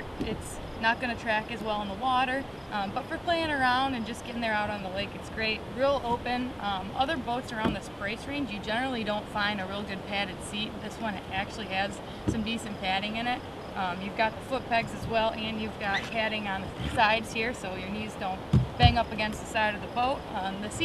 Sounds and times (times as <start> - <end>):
Speech: 0.0 - 20.8.